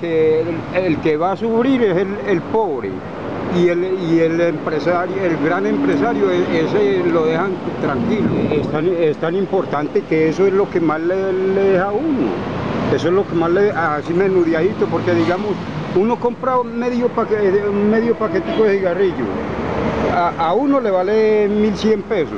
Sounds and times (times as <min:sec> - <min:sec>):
Speech: 0:00.0 - 0:19.4, 0:20.1 - 0:22.3.